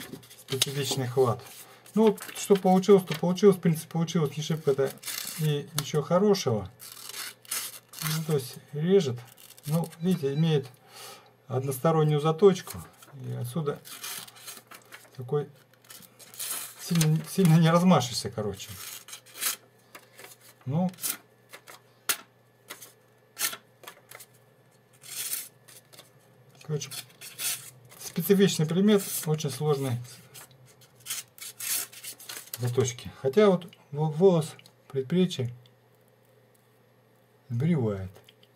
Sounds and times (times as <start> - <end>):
Inside, small room: 0.0 - 38.5
Speech: 0.5 - 6.8, 8.0 - 10.8, 11.5 - 13.9, 15.2 - 15.6, 16.8 - 18.8, 20.6 - 21.0, 26.6 - 27.1, 28.0 - 30.3, 32.6 - 35.6, 37.5 - 38.2.